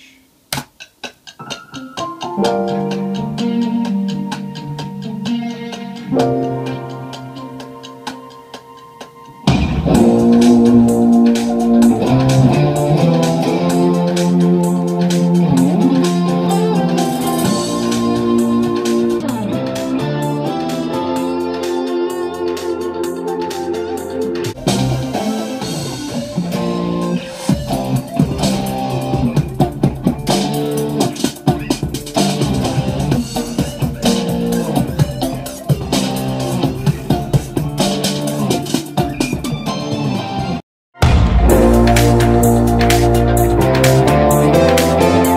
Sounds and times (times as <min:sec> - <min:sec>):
Keyboard (musical): 0:01.2 - 0:45.3.